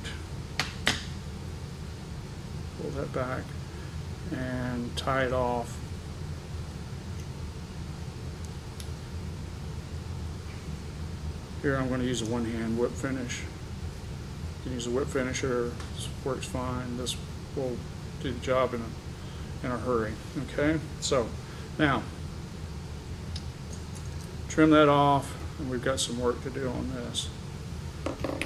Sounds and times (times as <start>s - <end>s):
Speech: 2.8s - 3.5s, 4.3s - 5.8s, 11.6s - 13.5s, 14.7s - 18.9s, 19.6s - 22.1s, 24.5s - 27.4s.